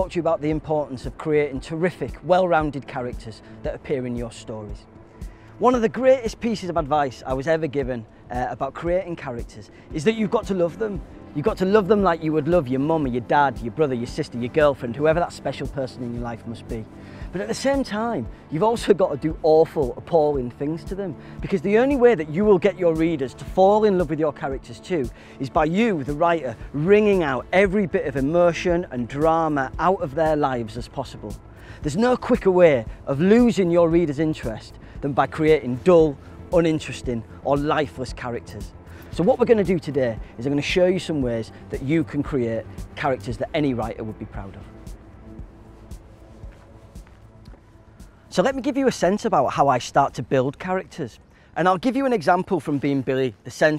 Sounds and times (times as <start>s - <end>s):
Speech: 0.0s - 4.9s, 5.6s - 44.7s, 48.3s - 53.7s
Music: 0.0s - 53.7s.